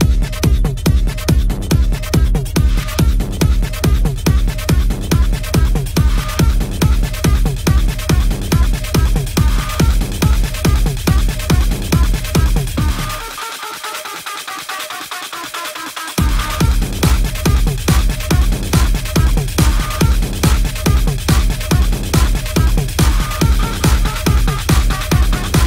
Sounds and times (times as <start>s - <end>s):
Music: 0.0s - 25.6s.